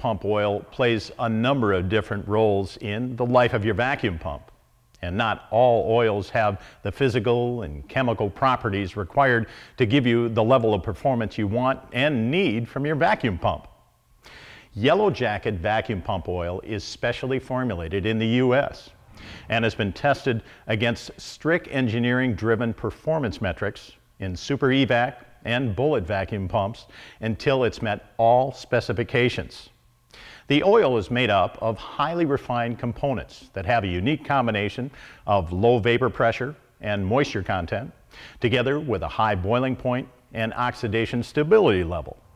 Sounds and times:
Speech: 0.0 - 13.8, 14.8 - 29.8, 30.5 - 42.2.

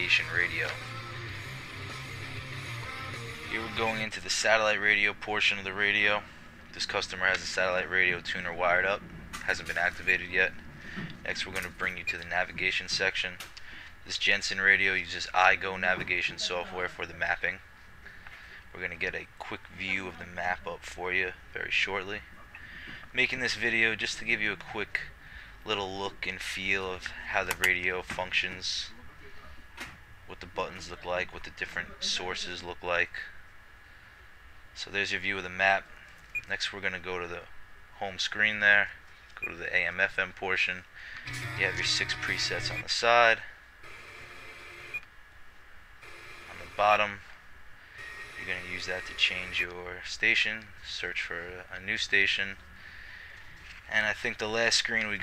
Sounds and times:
Speech: 0.0 - 0.8, 3.5 - 6.2, 6.8 - 10.6, 11.2 - 13.4, 14.1 - 17.6, 18.7 - 22.5, 23.1 - 29.6, 30.3 - 33.4, 34.8 - 40.9, 41.5 - 43.6, 46.6 - 47.2, 48.4 - 52.6, 53.9 - 55.2.

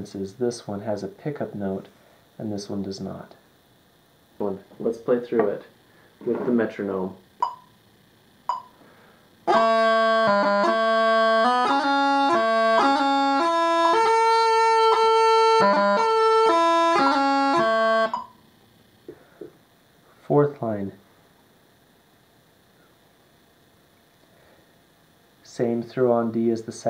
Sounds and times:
Wind instrument, woodwind instrument: 9.5 - 18.2.

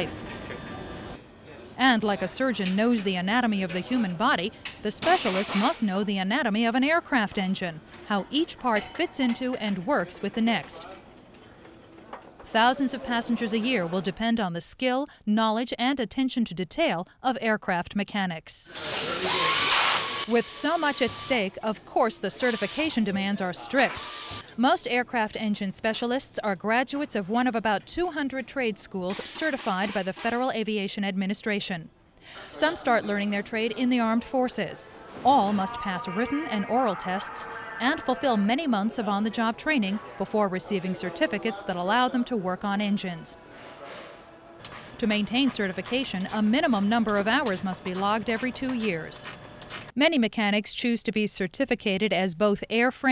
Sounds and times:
Speech: 1.5 - 11.0, 12.5 - 19.5, 20.3 - 24.0, 24.6 - 31.9, 32.5 - 43.4, 45.0 - 49.3, 50.0 - 53.1.

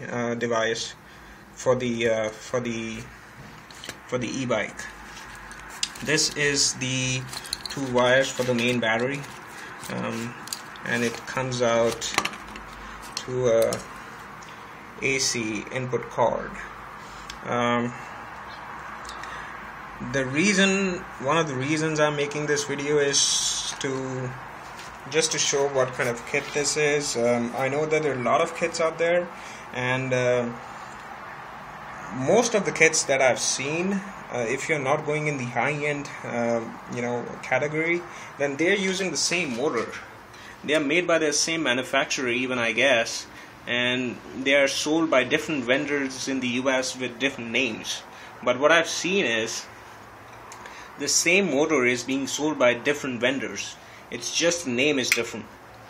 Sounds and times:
Speech: 0.0 - 1.0, 1.6 - 3.1, 4.1 - 5.0, 6.0 - 12.2, 13.2 - 13.9, 15.0 - 16.7, 17.4 - 18.0, 20.0 - 24.4, 25.1 - 30.6, 32.1 - 49.7, 51.0 - 55.5.

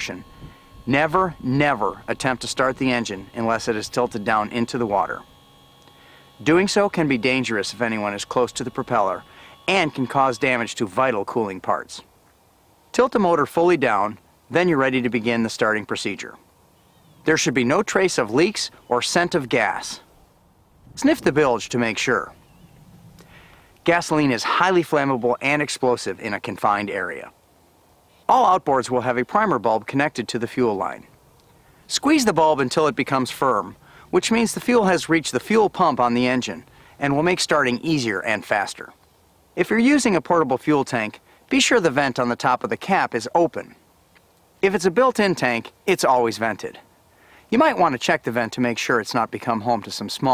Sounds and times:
Speech: 0.0 - 0.2, 0.9 - 5.2, 6.4 - 12.1, 12.9 - 16.4, 17.2 - 20.0, 21.0 - 22.4, 23.8 - 27.4, 28.3 - 31.1, 31.9 - 39.0, 39.6 - 43.8, 44.6 - 46.8, 47.5 - 50.3.

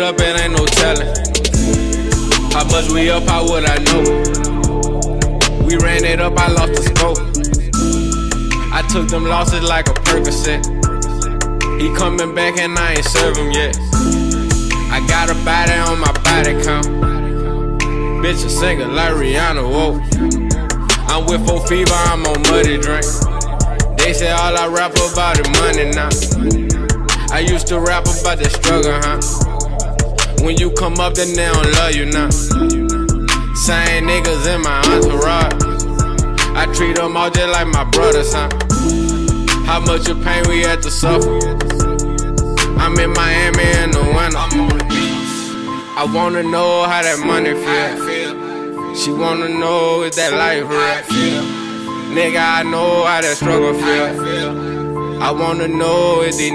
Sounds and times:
Rhythm and blues: 0.0 - 56.5
Soul music: 0.0 - 56.5.

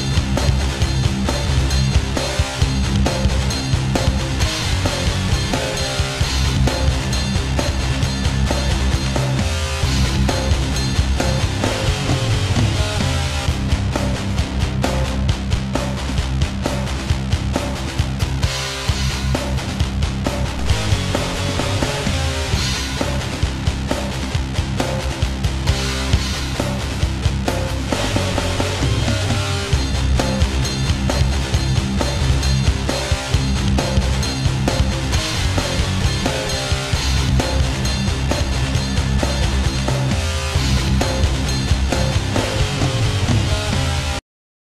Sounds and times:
Music: 0.0 - 44.2.

